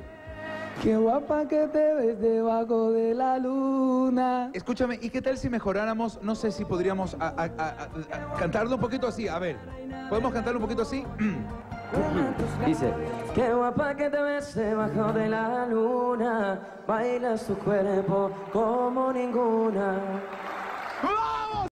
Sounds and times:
Music: 0:00.0 - 0:02.7, 0:05.4 - 0:21.7.

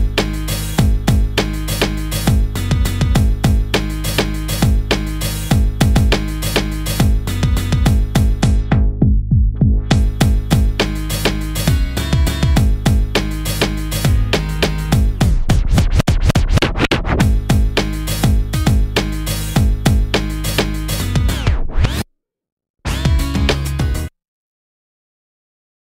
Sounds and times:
Music: 0:00.0 - 0:22.0, 0:22.9 - 0:24.2.

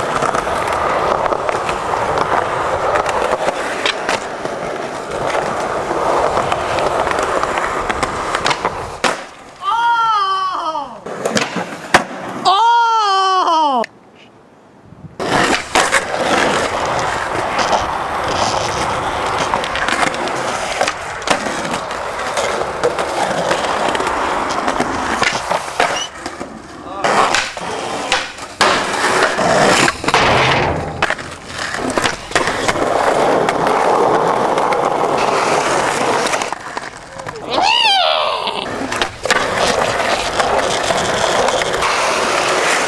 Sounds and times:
Skateboard: 0:00.0 - 0:12.6, 0:15.2 - 0:42.8.

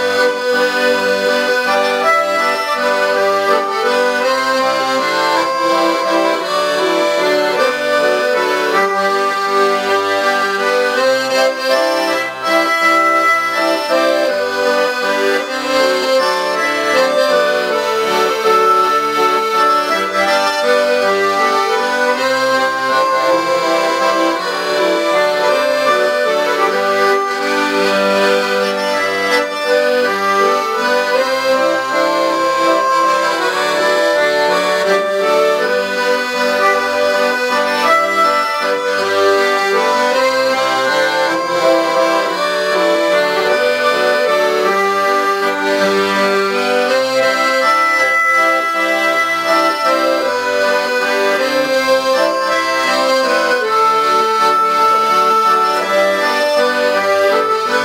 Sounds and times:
Accordion: 0:00.0 - 0:57.8.

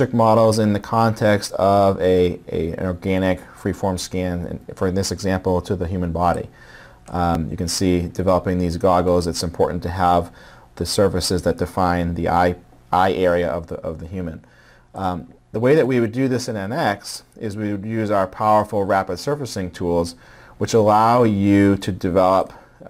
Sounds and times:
Speech: 0:00.0 - 0:22.9.

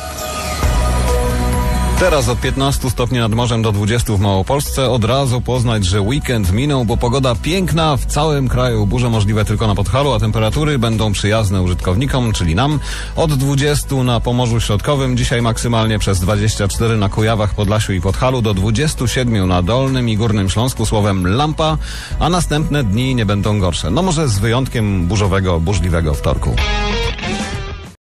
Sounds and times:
Speech: 0:02.0 - 0:26.7.

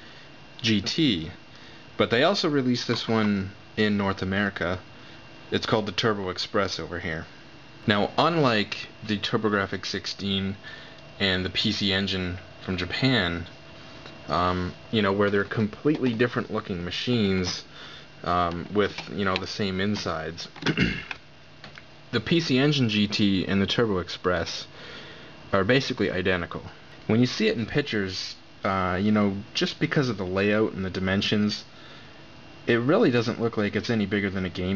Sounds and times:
Speech: 0:00.6 - 0:01.4, 0:02.0 - 0:04.9, 0:05.5 - 0:10.6, 0:11.2 - 0:13.5, 0:14.3 - 0:20.7, 0:22.1 - 0:24.7, 0:25.5 - 0:31.7, 0:32.6 - 0:34.7.

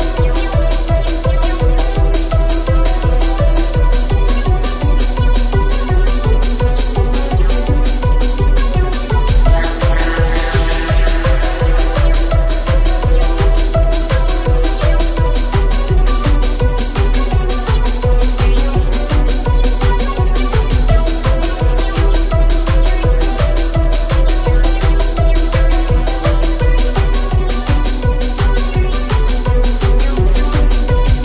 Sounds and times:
Techno: 0:00.0 - 0:31.2
Trance music: 0:00.0 - 0:31.2.

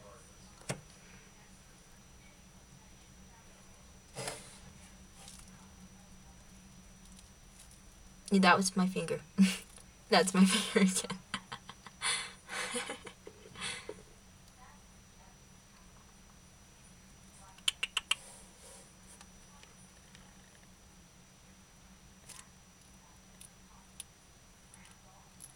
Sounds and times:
Speech: 0:00.0 - 0:06.6, 0:08.3 - 0:11.5, 0:12.6 - 0:16.1, 0:17.2 - 0:18.0.

